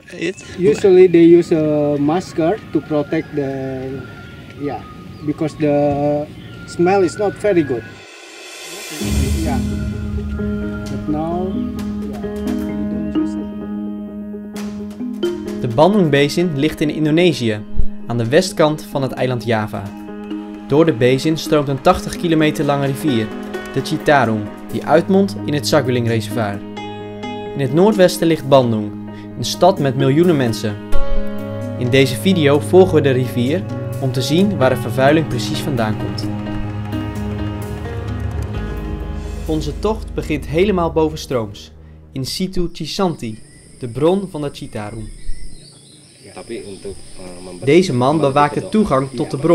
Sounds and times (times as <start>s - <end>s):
Music: 0.0s - 2.7s, 6.8s - 43.4s, 46.6s - 49.5s
Speech: 0.0s - 7.9s, 9.0s - 9.7s, 15.6s - 19.9s, 27.6s - 30.8s, 31.8s - 36.2s, 39.5s - 45.1s, 46.3s - 49.5s.